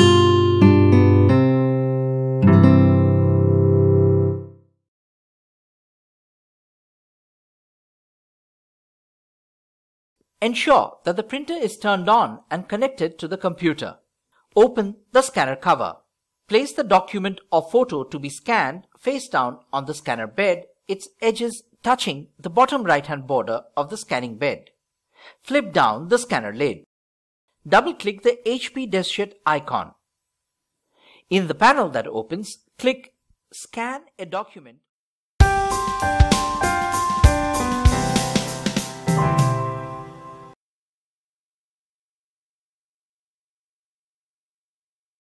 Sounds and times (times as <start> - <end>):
Music: 0.0 - 4.8, 35.4 - 40.6
Speech: 10.4 - 14.0, 14.6 - 24.7, 25.4 - 26.9, 27.7 - 30.0, 31.3 - 34.9.